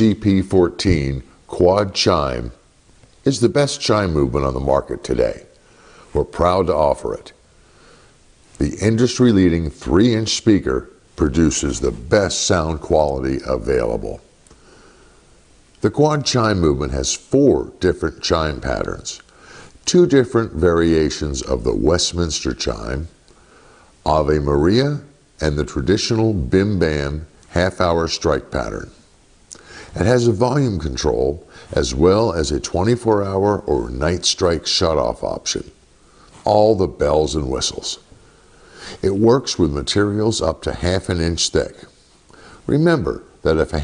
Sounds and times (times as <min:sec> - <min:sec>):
Speech: 0:00.0 - 0:07.4, 0:08.6 - 0:14.3, 0:15.8 - 0:23.2, 0:24.0 - 0:29.0, 0:29.9 - 0:35.8, 0:36.4 - 0:38.1, 0:39.0 - 0:42.0, 0:42.6 - 0:43.8.